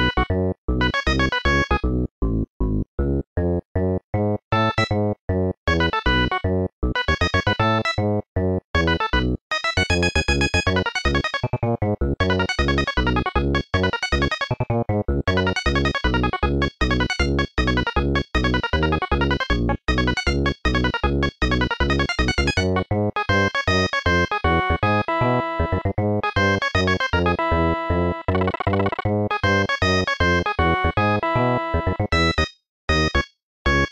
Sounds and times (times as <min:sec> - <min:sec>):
Music: 0:00.0 - 0:33.9.